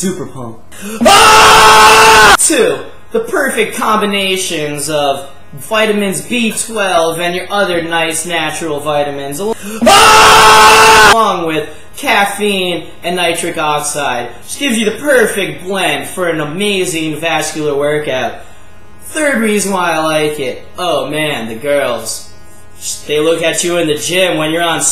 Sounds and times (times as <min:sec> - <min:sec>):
Speech: 0:00.0 - 0:00.6, 0:02.4 - 0:09.6, 0:11.2 - 0:18.4, 0:19.1 - 0:24.9.